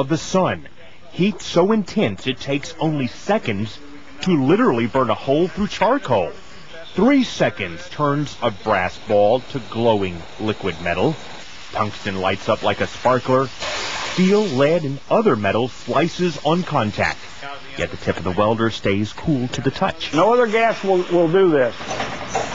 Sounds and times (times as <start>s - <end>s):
Speech: 0.0s - 11.2s, 11.8s - 13.6s, 14.2s - 21.8s.